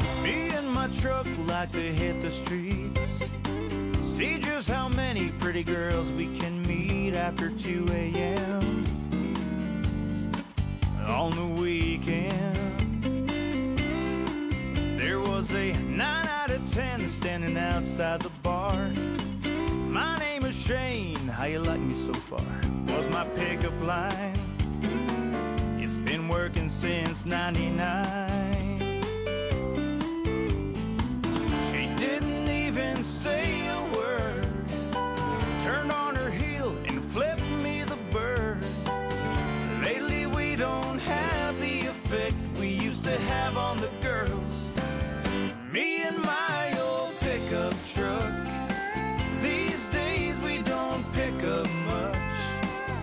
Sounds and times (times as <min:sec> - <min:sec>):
Music: 0:00.0 - 0:53.0.